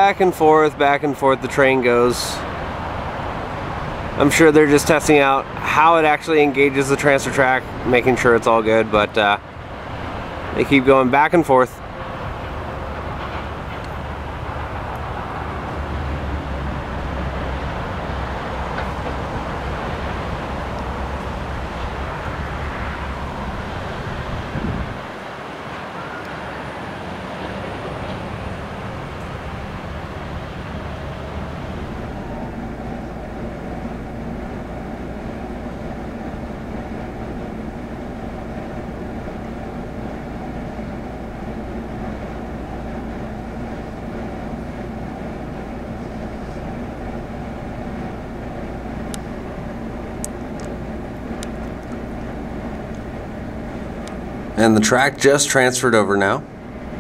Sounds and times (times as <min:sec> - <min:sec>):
Speech: 0:00.0 - 0:02.4, 0:04.2 - 0:09.4, 0:10.6 - 0:11.8, 0:54.6 - 0:56.5
Field recording: 0:00.0 - 0:57.0.